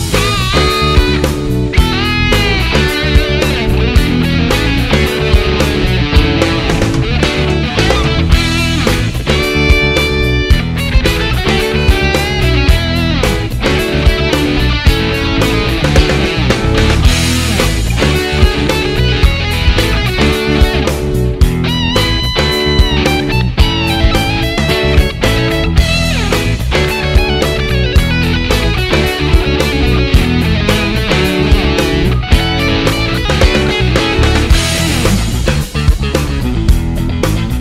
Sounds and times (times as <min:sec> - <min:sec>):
Bass guitar: 0:00.0 - 0:37.6
Strum: 0:00.0 - 0:37.6.